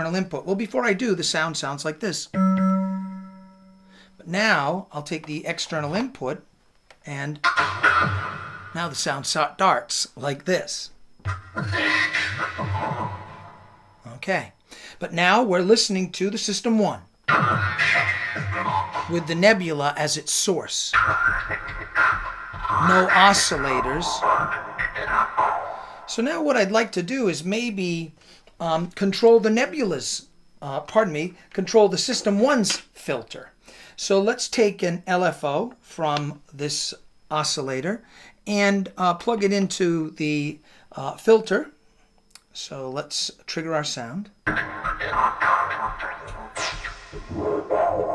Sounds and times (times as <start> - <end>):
Speech: 0.0 - 2.4, 4.2 - 6.4, 7.0 - 7.4, 8.8 - 11.0, 14.1 - 17.1, 19.1 - 21.0, 22.8 - 41.8, 42.6 - 44.4, 45.0 - 46.6, 47.3 - 48.1
Music: 7.5 - 8.8, 11.3 - 13.8, 17.3 - 19.4, 21.0 - 25.9, 44.5 - 48.1.